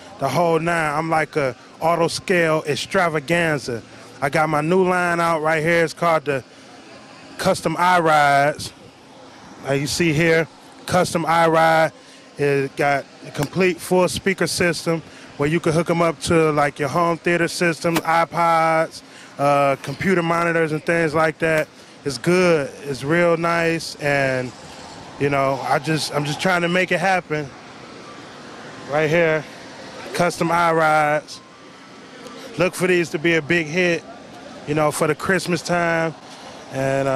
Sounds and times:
Speech: 0:00.0 - 0:06.4, 0:07.2 - 0:08.8, 0:09.6 - 0:24.5, 0:25.2 - 0:27.5, 0:28.9 - 0:29.5, 0:30.1 - 0:31.4, 0:32.6 - 0:34.0, 0:34.7 - 0:37.1
Hubbub, speech noise, speech babble: 0:00.0 - 0:37.1.

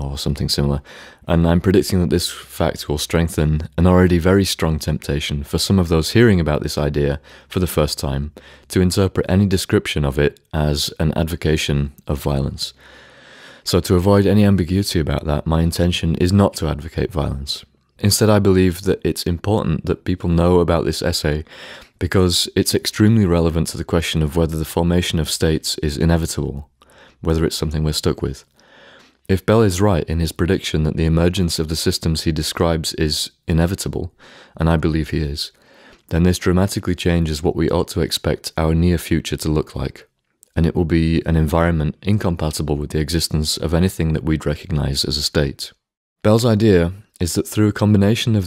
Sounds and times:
Speech: 0:00.0 - 0:12.8, 0:13.6 - 0:28.5, 0:29.3 - 0:48.4.

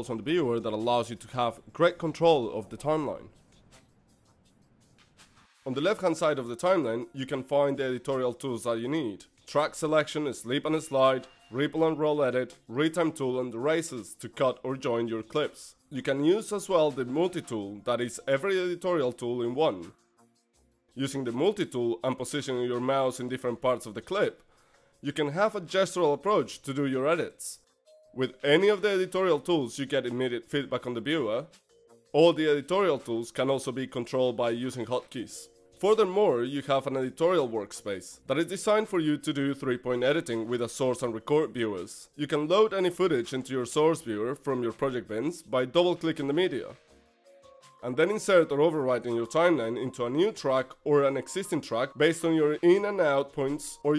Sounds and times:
Speech: 0:00.0 - 0:03.3, 0:05.7 - 0:19.9, 0:21.0 - 0:24.4, 0:25.0 - 0:27.6, 0:28.2 - 0:31.5, 0:32.2 - 0:46.8, 0:47.8 - 0:53.9.

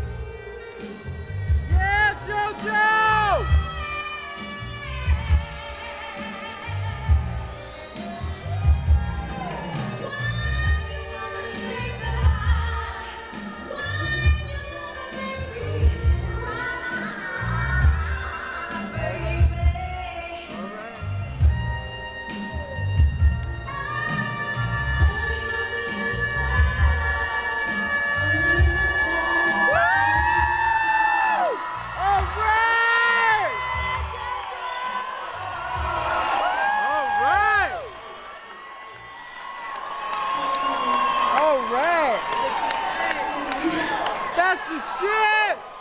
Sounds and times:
Music: 0:00.0 - 0:45.3.

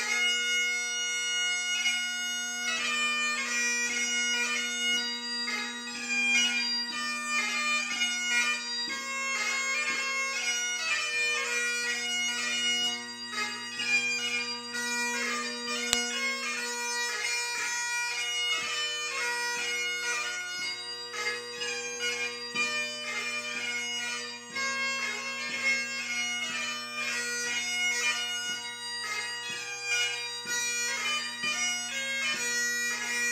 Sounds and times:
Bagpipes: 0:00.0 - 0:33.3.

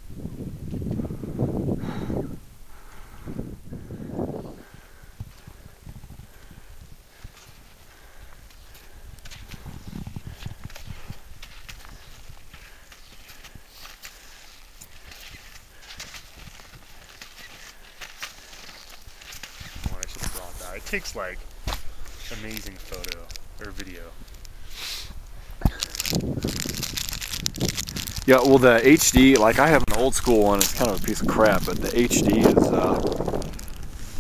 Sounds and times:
Speech: 0:19.8 - 0:21.4, 0:22.3 - 0:24.2, 0:28.3 - 0:33.0.

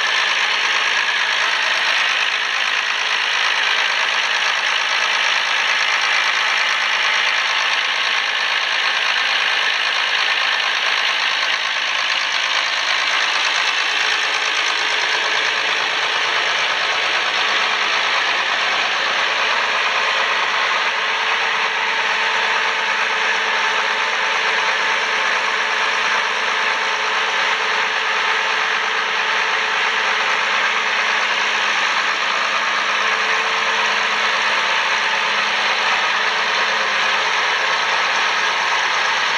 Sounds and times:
Heavy engine (low frequency): 0:00.0 - 0:39.3
Vehicle: 0:00.0 - 0:39.3.

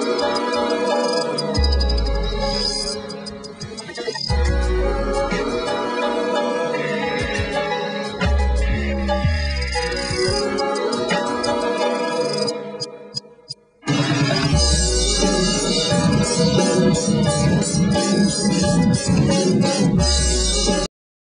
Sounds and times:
Music: 0:00.0 - 0:20.9.

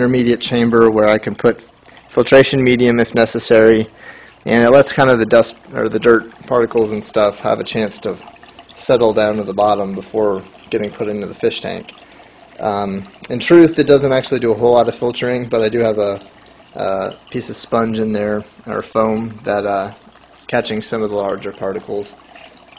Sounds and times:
Speech: 0:00.0 - 0:03.9, 0:04.5 - 0:08.2, 0:08.8 - 0:11.9, 0:12.6 - 0:22.2
Pour: 0:00.0 - 0:22.7.

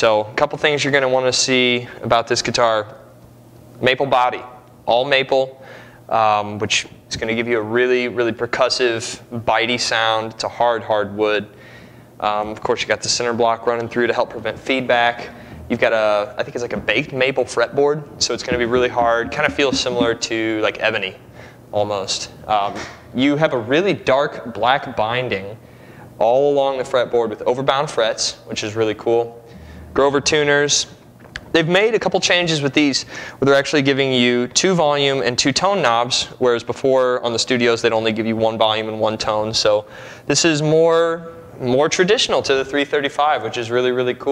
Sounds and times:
Speech: 0:00.0 - 0:03.0, 0:03.8 - 0:11.5, 0:12.2 - 0:25.6, 0:26.2 - 0:44.3.

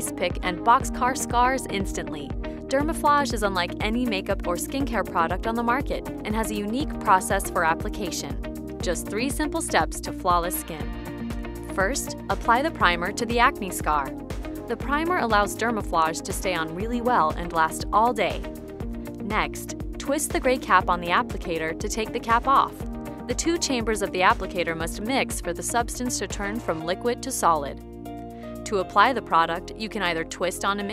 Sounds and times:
Speech: 0:00.0 - 0:10.9, 0:11.8 - 0:14.1, 0:14.7 - 0:18.4, 0:19.2 - 0:27.8, 0:28.7 - 0:30.9
Music: 0:00.0 - 0:30.9.

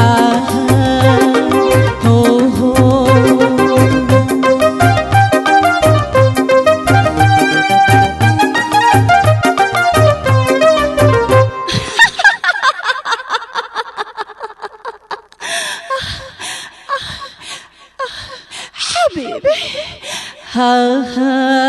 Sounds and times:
Music: 0:00.0 - 0:12.1.

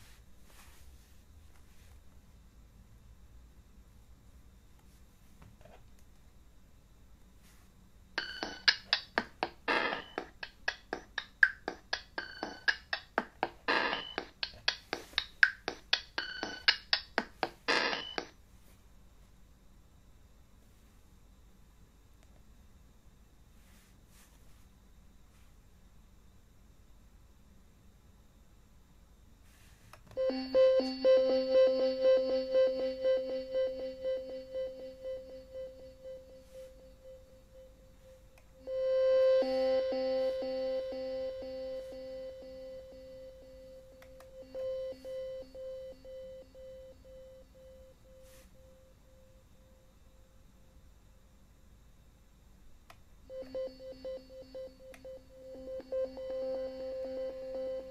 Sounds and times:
Synthesizer: 0:08.2 - 0:18.3, 0:30.2 - 0:48.8, 0:53.3 - 0:57.9.

